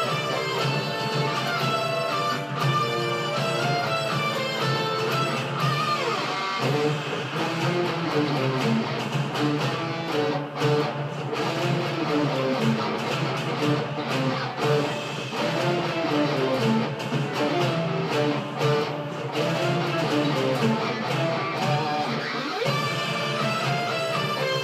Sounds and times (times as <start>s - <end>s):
Electric guitar: 0.0s - 24.6s
Strum: 0.0s - 24.6s.